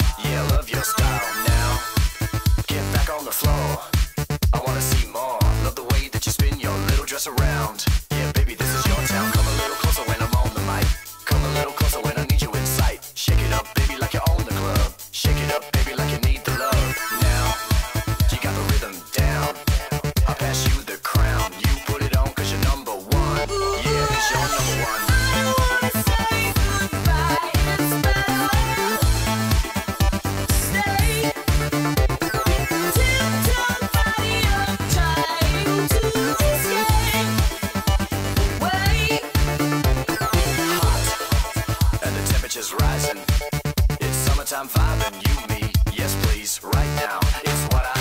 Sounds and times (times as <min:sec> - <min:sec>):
Music: 0:00.0 - 0:48.0.